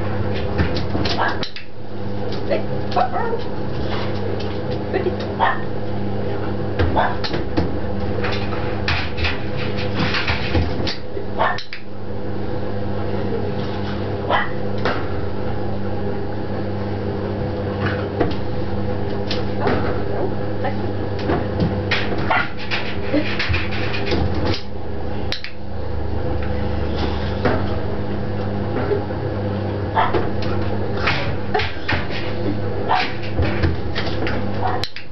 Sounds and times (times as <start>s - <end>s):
Bow-wow: 3.0s - 3.5s, 7.0s - 7.3s, 11.4s - 11.6s, 14.3s - 14.6s, 30.0s - 30.2s.